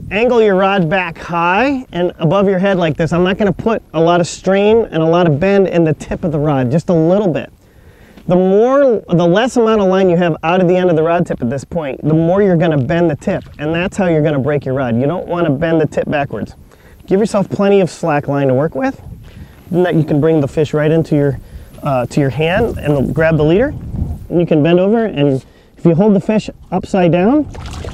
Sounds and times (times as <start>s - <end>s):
Speech: 0.1s - 7.5s, 8.3s - 19.0s, 19.7s - 27.5s.